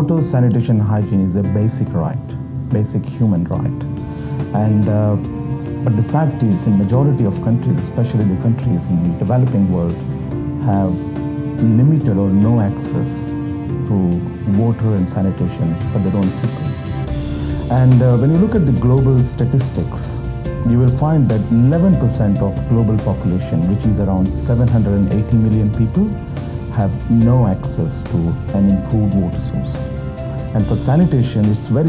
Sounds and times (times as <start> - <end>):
Speech: 0.0 - 3.9, 4.6 - 5.3, 5.9 - 10.0, 10.6 - 11.0, 11.6 - 13.3, 13.9 - 16.7, 17.7 - 29.8, 30.6 - 31.8
Music: 0.0 - 31.8.